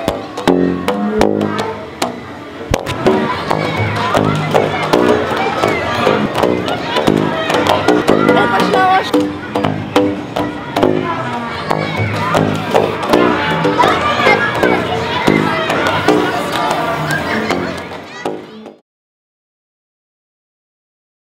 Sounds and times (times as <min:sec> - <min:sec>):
Speech: 0:03.0 - 0:09.6, 0:10.5 - 0:18.8.